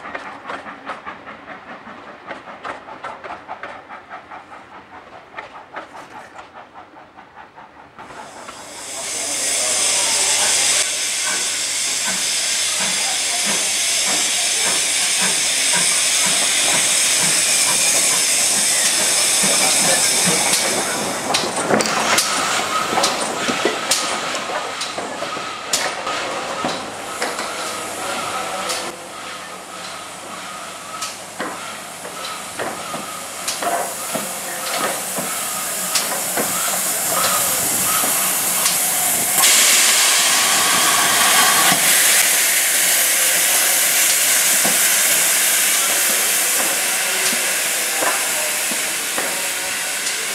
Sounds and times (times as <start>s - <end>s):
Clickety-clack: 0.0s - 8.6s, 12.8s - 27.8s, 31.0s - 35.4s, 36.0s - 37.4s, 46.0s - 50.2s
Railroad car, train wagon: 0.0s - 50.3s
Train: 0.0s - 50.3s.